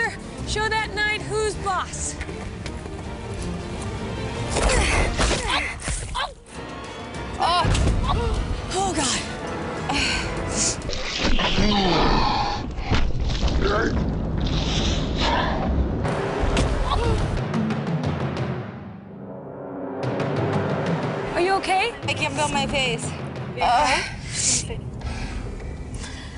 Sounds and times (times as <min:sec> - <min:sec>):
Music: 0:00.0 - 0:26.3.